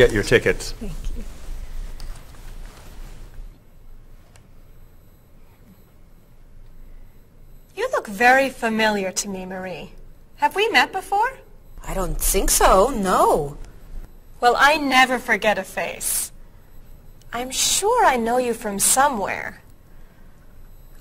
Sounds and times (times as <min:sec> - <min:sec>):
Conversation: 0:00.0 - 0:20.9.